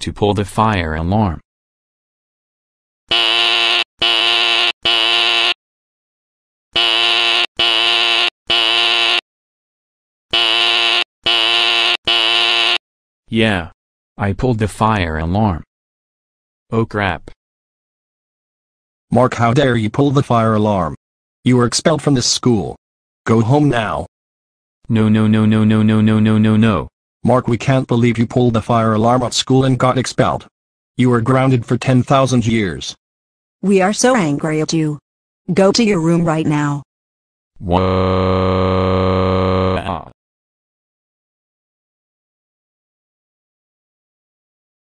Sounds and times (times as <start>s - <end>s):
Speech: 0.0s - 1.4s, 13.3s - 15.7s, 16.7s - 17.4s, 19.1s - 24.1s, 24.9s - 33.0s, 33.6s - 36.8s, 37.6s - 38.0s, 39.7s - 40.1s.